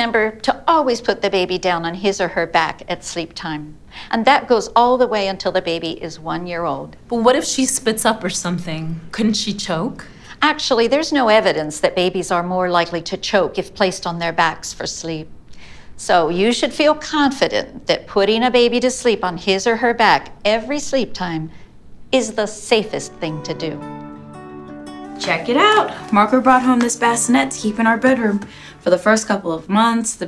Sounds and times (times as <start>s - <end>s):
Speech: 0.0s - 15.3s, 16.0s - 21.5s, 22.2s - 23.8s, 25.2s - 30.2s
Inside, small room: 0.0s - 30.2s.